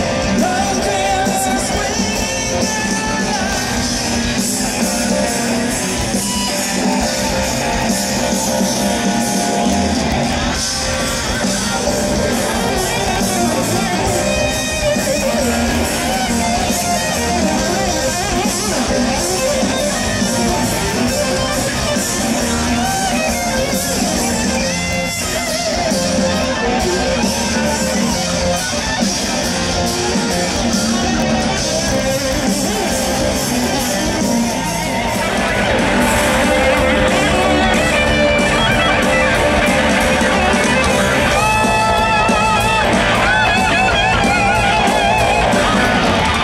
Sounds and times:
Electric guitar: 0.0s - 46.4s.

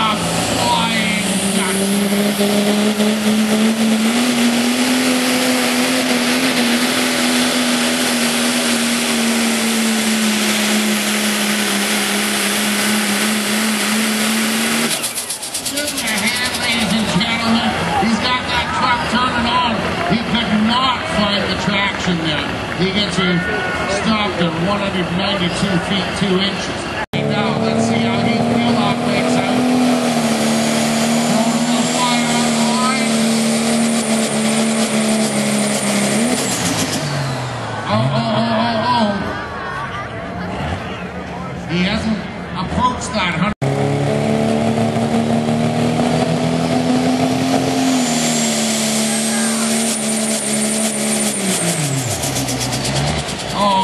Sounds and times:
Vehicle: 0.0s - 53.8s.

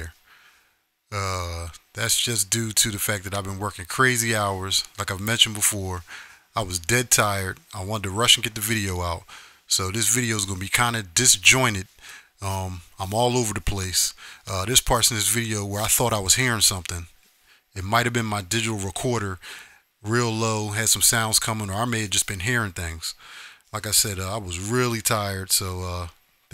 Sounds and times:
Speech: 1.1s - 17.1s, 17.8s - 19.4s, 20.0s - 26.5s.

